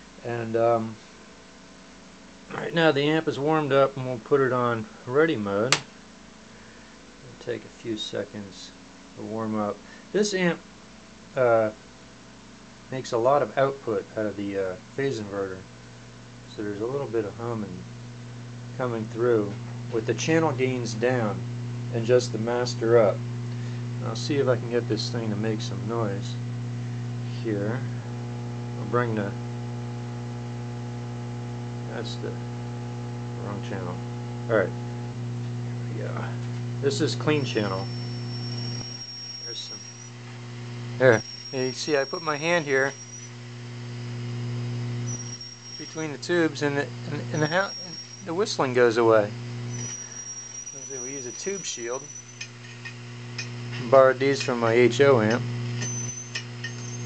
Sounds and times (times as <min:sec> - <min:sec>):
Speech: 0:00.2 - 0:01.0, 0:02.5 - 0:05.8, 0:07.2 - 0:10.6, 0:11.4 - 0:11.8, 0:12.9 - 0:15.7, 0:16.5 - 0:17.9, 0:18.8 - 0:23.2, 0:24.0 - 0:26.4, 0:27.3 - 0:28.0, 0:28.8 - 0:29.4, 0:31.9 - 0:32.4, 0:33.4 - 0:34.8, 0:35.9 - 0:37.9, 0:39.5 - 0:39.8, 0:41.0 - 0:43.0, 0:45.8 - 0:49.4, 0:50.8 - 0:52.1, 0:53.8 - 0:55.5.